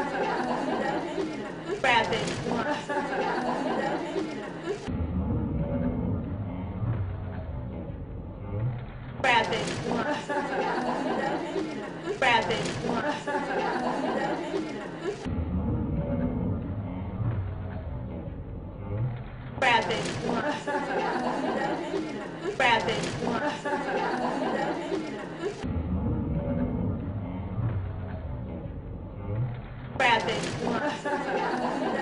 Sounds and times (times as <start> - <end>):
Speech: 0.0 - 4.9, 9.2 - 15.3, 19.6 - 25.6, 30.0 - 32.0.